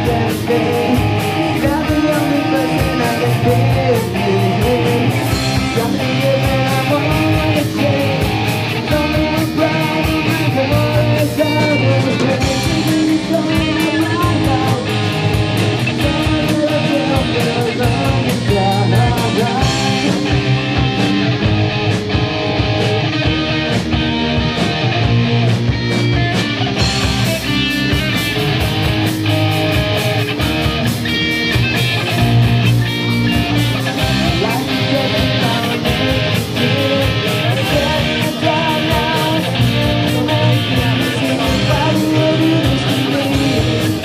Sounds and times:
Singing: 0.0 - 15.1, 15.9 - 20.3, 33.9 - 44.0
Inside, large room or hall: 0.0 - 44.0
Music: 0.0 - 44.0.

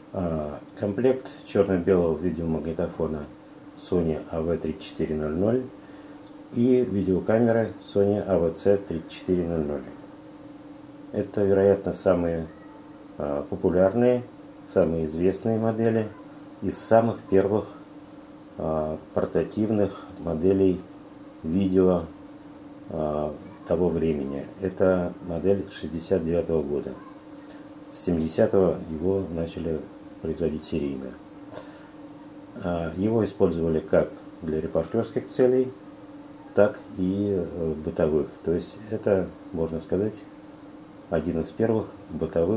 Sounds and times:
Speech: 0.1 - 5.8, 6.5 - 10.0, 11.1 - 17.9, 18.6 - 22.2, 22.9 - 27.2, 27.9 - 31.2, 32.6 - 35.8, 36.4 - 40.3, 41.1 - 42.5.

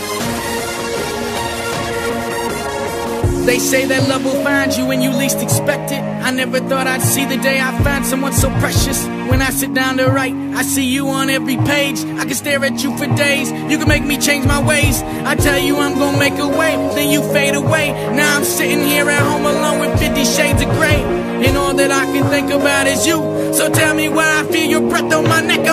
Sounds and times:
Music: 0.0 - 25.7.

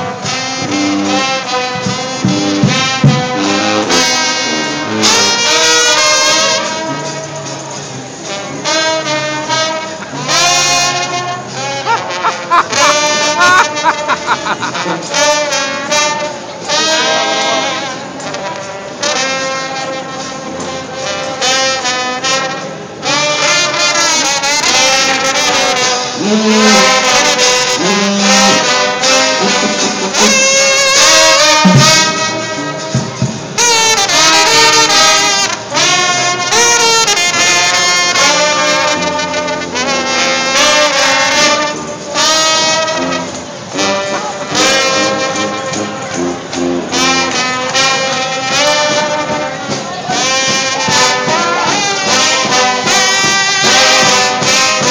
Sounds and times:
Music: 0.0 - 54.9.

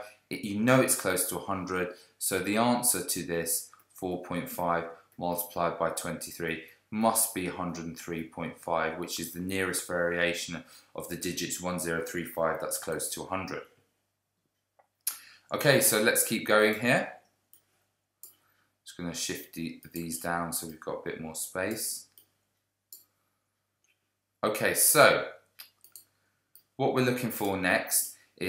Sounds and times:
Speech: 0.0 - 13.7, 15.1 - 17.2, 18.9 - 22.1, 24.4 - 25.4, 26.8 - 28.4
Inside, small room: 0.0 - 28.4.

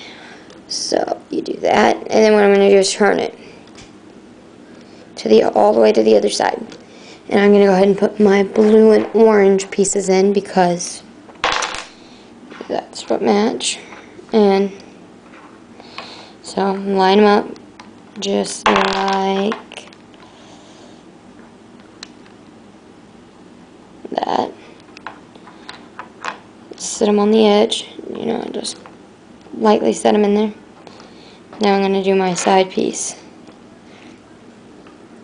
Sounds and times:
Inside, small room: 0.0 - 35.2
Speech: 0.7 - 3.4, 5.2 - 6.7, 7.3 - 11.1, 12.6 - 14.8, 16.4 - 17.6, 18.2 - 19.6, 24.1 - 24.6, 26.8 - 28.8, 29.6 - 30.6, 31.6 - 33.3.

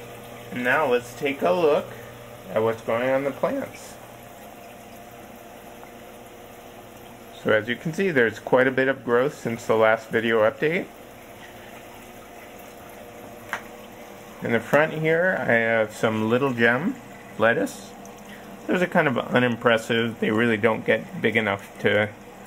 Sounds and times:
Speech: 0.5 - 4.0, 7.4 - 10.9, 14.4 - 18.0, 18.7 - 22.2.

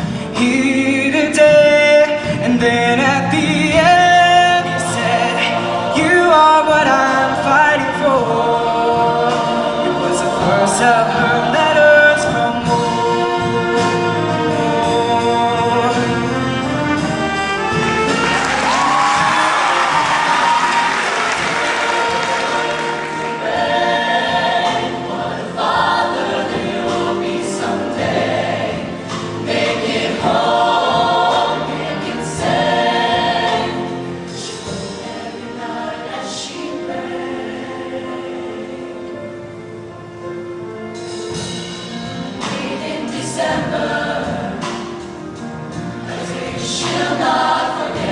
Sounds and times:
Choir: 0.0 - 39.5, 41.4 - 48.1.

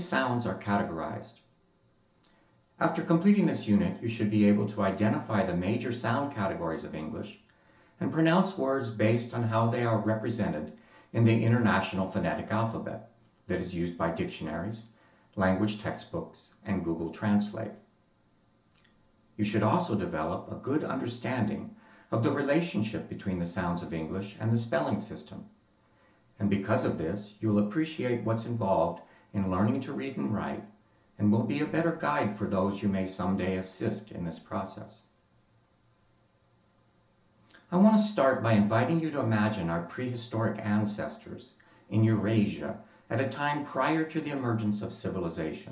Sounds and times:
Male speech, man speaking: 0.0 - 1.4, 2.8 - 7.4, 8.0 - 17.7, 19.4 - 25.5, 26.4 - 30.6, 31.2 - 35.1, 37.6 - 45.7
Narration, monologue: 0.0 - 45.7.

